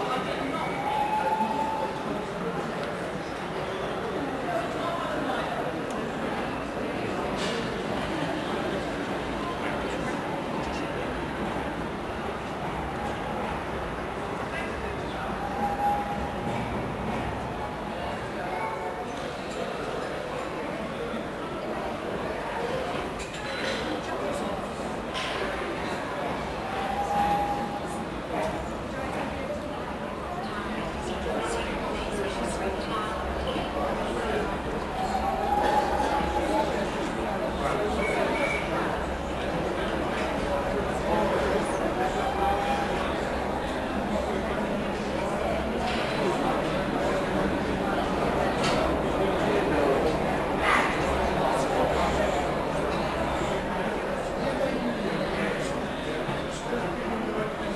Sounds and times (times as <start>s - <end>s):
Speech: 0.0s - 57.7s.